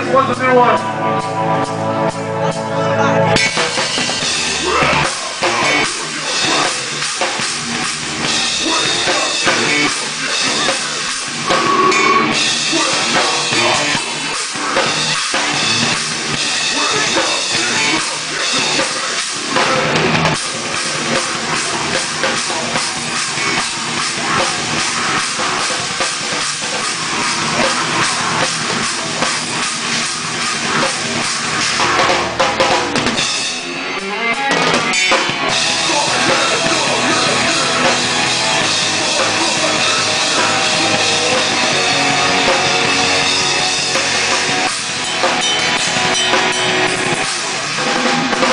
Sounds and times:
Rock music: 0.0s - 48.5s
Drum kit: 3.3s - 48.5s
Drum: 3.4s - 48.5s.

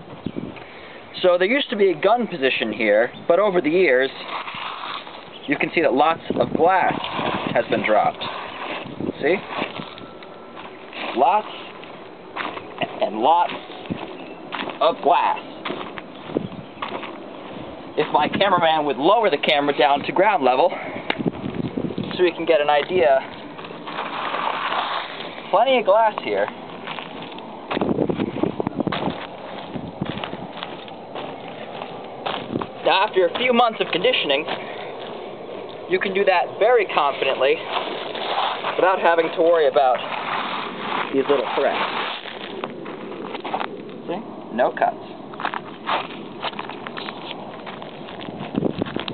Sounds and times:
Speech: 1.2s - 4.3s, 5.5s - 8.3s, 9.2s - 9.5s, 11.1s - 11.6s, 12.8s - 13.6s, 14.8s - 15.4s, 18.0s - 20.8s, 22.1s - 23.3s, 25.5s - 26.5s, 32.8s - 34.5s, 35.9s - 37.7s, 38.8s - 40.1s, 41.1s - 41.8s, 44.0s - 45.0s.

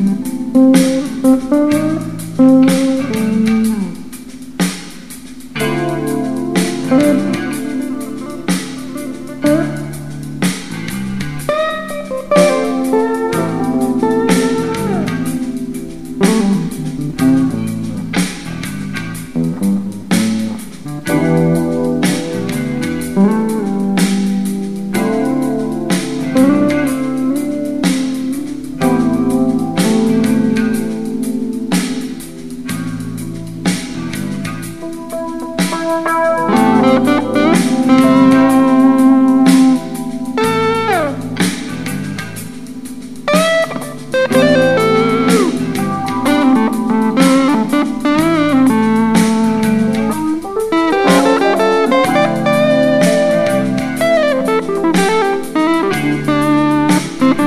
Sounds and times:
Music: 0.0s - 57.4s.

